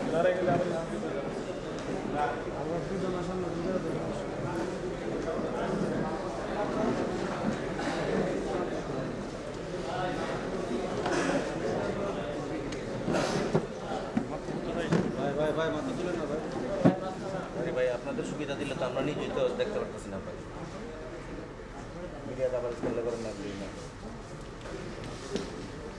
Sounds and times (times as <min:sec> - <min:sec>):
Male speech, man speaking: 0:00.0 - 0:01.4, 0:13.9 - 0:20.4, 0:21.9 - 0:23.9.